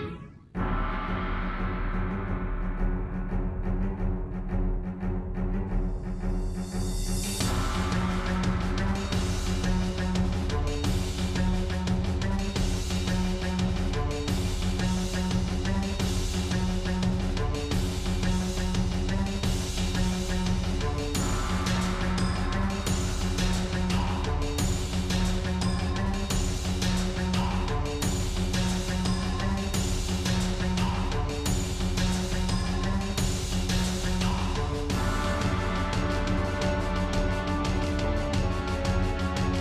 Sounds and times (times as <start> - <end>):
Exciting music: 0.0 - 39.6.